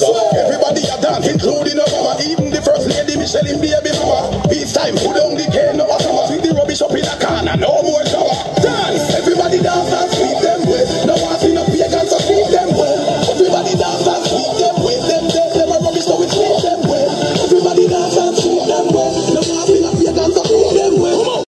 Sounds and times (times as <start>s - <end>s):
Music: 0.0s - 21.4s.